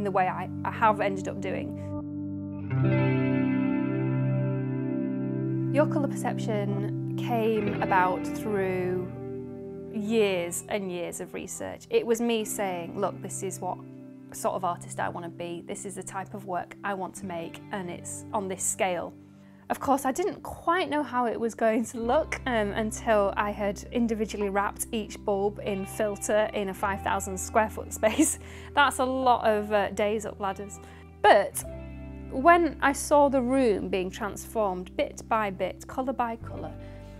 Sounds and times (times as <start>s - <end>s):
Speech: 0.0s - 1.7s, 5.8s - 9.2s, 10.0s - 13.8s, 14.4s - 19.1s, 19.7s - 31.7s, 32.3s - 36.8s
Music: 0.0s - 37.1s.